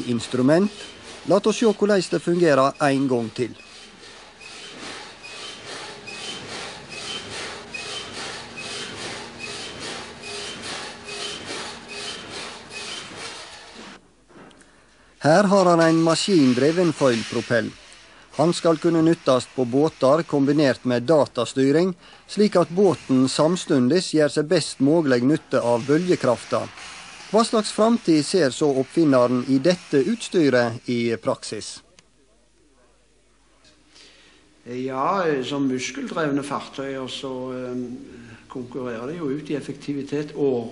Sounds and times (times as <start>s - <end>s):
Speech: 0.0s - 3.6s, 15.2s - 17.8s, 18.4s - 26.7s, 27.4s - 33.1s, 34.6s - 40.7s.